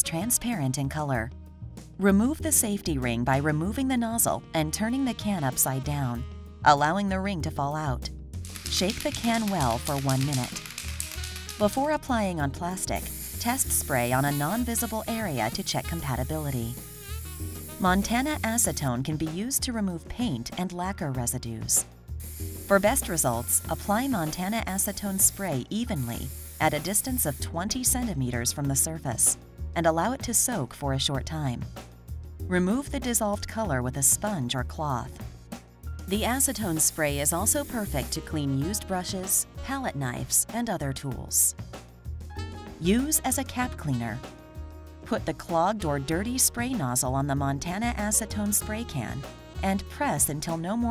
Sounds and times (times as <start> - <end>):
Speech: 0.0 - 1.3, 2.0 - 8.1, 8.7 - 10.6, 11.6 - 16.8, 17.8 - 21.8, 22.7 - 31.7, 32.5 - 35.2, 36.1 - 41.5, 42.8 - 44.2, 45.1 - 50.9
Music: 0.0 - 50.9
Spray: 8.5 - 11.6, 12.8 - 18.9, 22.2 - 27.5, 36.1 - 38.2.